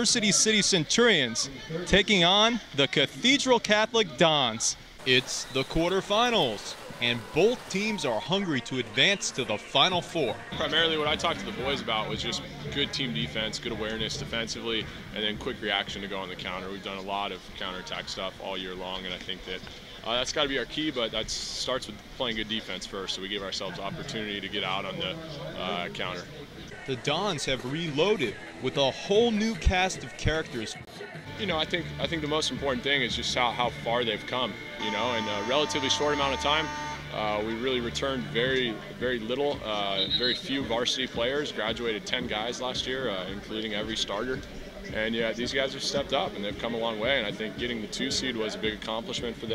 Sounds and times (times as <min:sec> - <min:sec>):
Speech: 0:00.0 - 0:49.5.